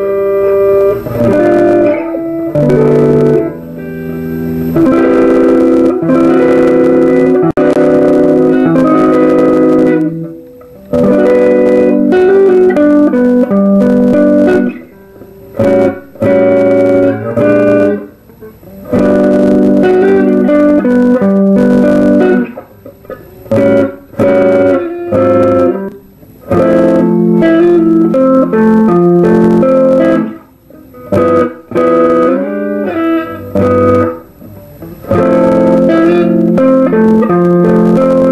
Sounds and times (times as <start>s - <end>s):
Acoustic guitar: 0.0s - 38.3s
Bass guitar: 0.0s - 38.3s
Strum: 0.0s - 38.3s.